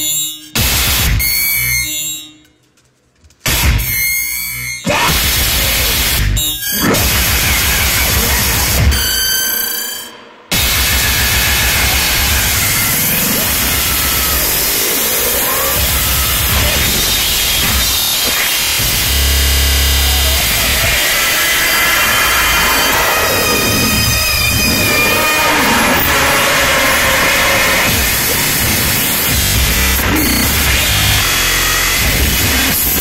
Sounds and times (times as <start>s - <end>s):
Music: 0.0s - 33.0s.